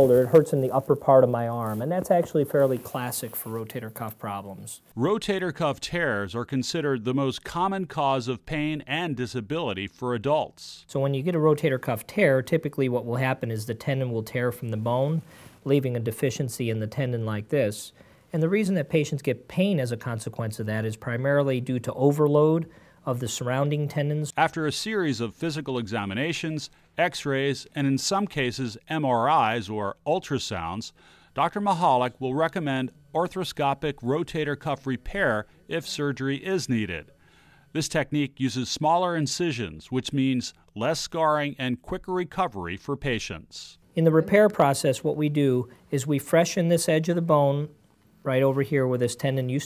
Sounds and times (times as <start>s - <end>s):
Speech: 0.0s - 37.1s, 37.7s - 49.6s.